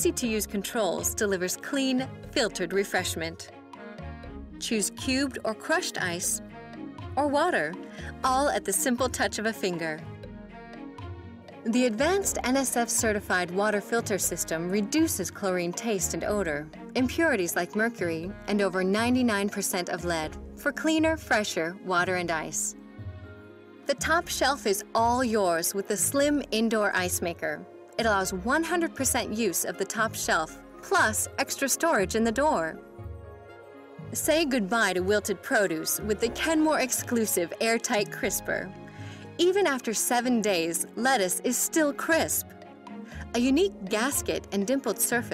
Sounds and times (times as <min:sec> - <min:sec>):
Speech: 0:00.0 - 0:03.5, 0:04.6 - 0:06.4, 0:07.2 - 0:10.0, 0:11.7 - 0:22.8, 0:23.9 - 0:32.8, 0:34.2 - 0:38.7, 0:39.4 - 0:42.4, 0:43.2 - 0:45.3
Music: 0:00.0 - 0:45.3.